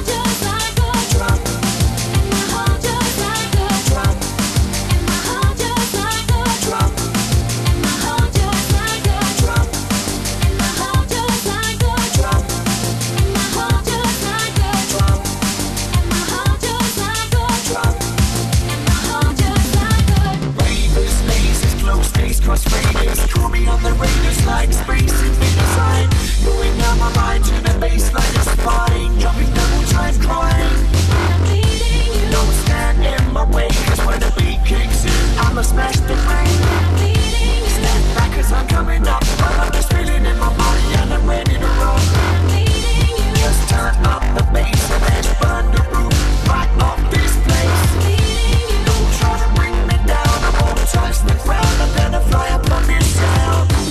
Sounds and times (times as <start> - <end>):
Music: 0.0 - 53.9.